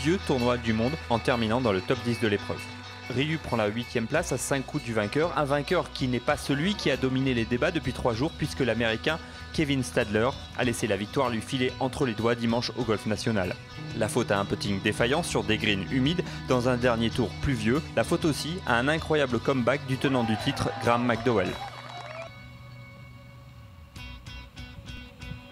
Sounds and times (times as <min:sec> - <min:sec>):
Speech: 0:00.0 - 0:21.7
Music: 0:00.0 - 0:25.5.